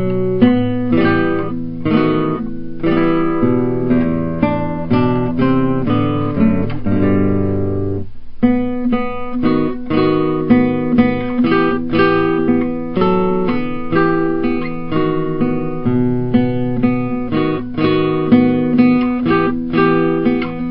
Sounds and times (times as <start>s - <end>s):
Acoustic guitar: 0.0s - 20.7s
Electric guitar: 0.0s - 20.7s
Strum: 0.0s - 20.7s.